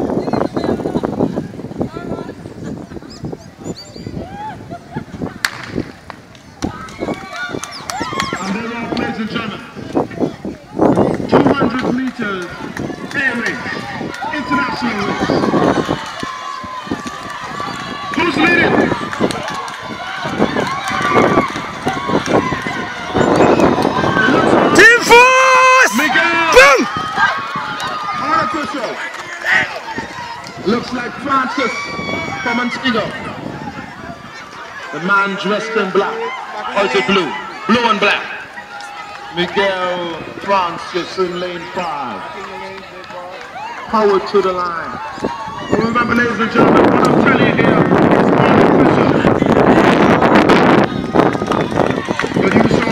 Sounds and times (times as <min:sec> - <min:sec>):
Outside, urban or manmade: 0:00.0 - 0:52.9
Run: 0:00.0 - 0:52.9.